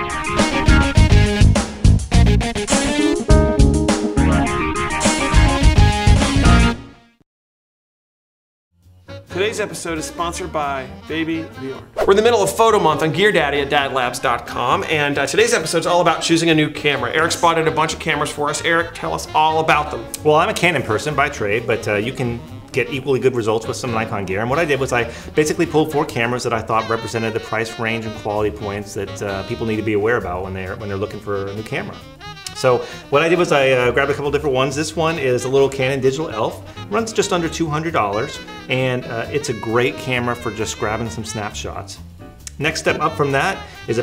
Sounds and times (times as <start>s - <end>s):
Music: 0.0s - 7.2s, 8.7s - 44.0s
Speech: 9.3s - 44.0s.